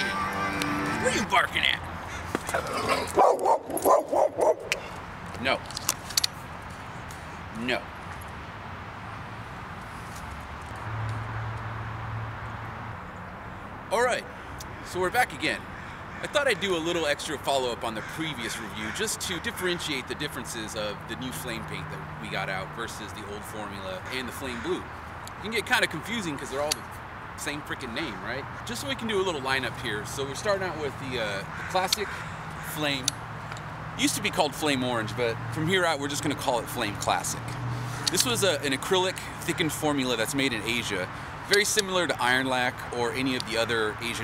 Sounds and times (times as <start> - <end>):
Speech: 1.0 - 1.8, 5.4 - 5.6, 7.6 - 7.9, 13.9 - 14.3, 14.9 - 15.6, 16.2 - 26.8, 27.4 - 32.1, 32.7 - 33.1, 34.0 - 44.2.